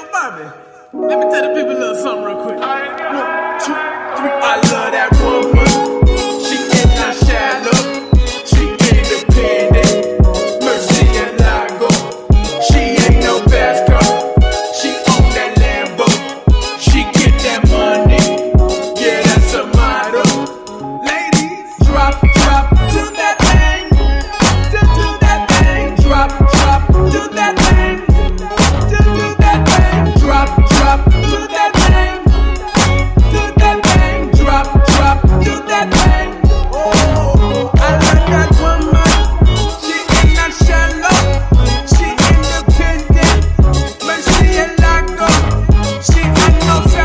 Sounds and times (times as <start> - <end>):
Music: 0.0 - 47.0.